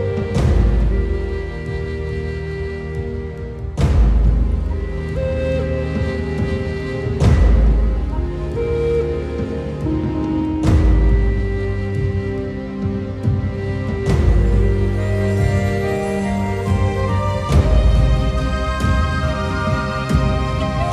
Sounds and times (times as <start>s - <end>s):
Music: 0.0s - 20.9s.